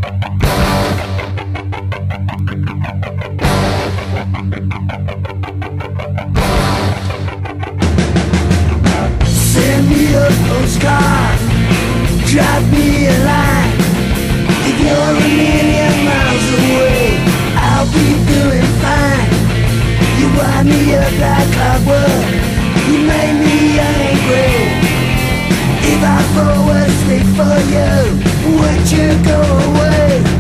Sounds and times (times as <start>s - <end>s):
Punk rock: 0.0s - 30.4s.